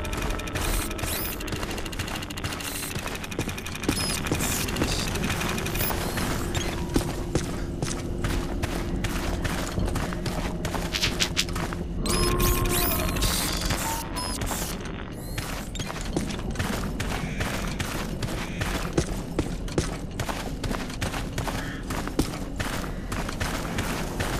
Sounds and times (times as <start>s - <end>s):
Outside, urban or manmade: 0.0s - 24.3s.